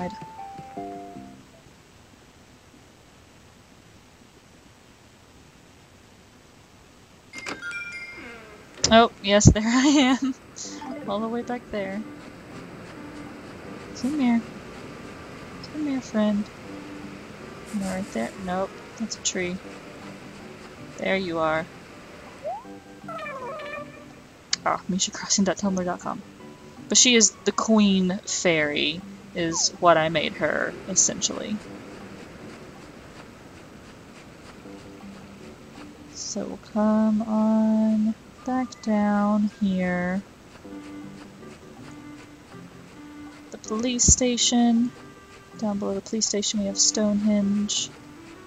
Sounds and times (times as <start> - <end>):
Speech: 0.0 - 0.2, 8.9 - 12.1, 14.0 - 14.5, 15.7 - 16.5, 17.7 - 19.6, 21.0 - 21.7, 24.6 - 26.2, 26.9 - 31.6, 36.2 - 40.2, 43.6 - 44.9, 45.6 - 47.9
Music: 0.0 - 1.8, 7.4 - 9.7, 10.6 - 48.4.